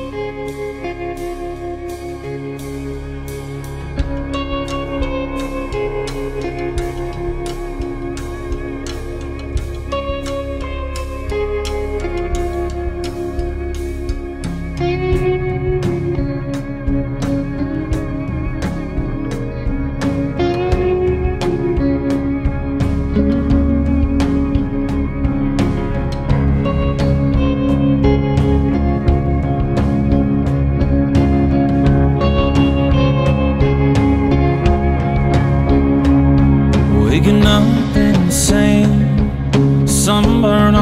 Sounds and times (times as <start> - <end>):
Steel guitar, slide guitar: 0.0 - 40.8.